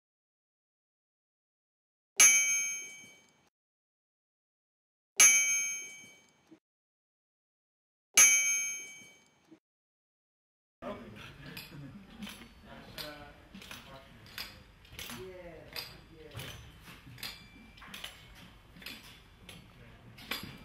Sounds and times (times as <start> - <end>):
Chink, clink: 2.2 - 3.4, 5.2 - 6.4, 8.2 - 9.4, 15.8 - 18.2.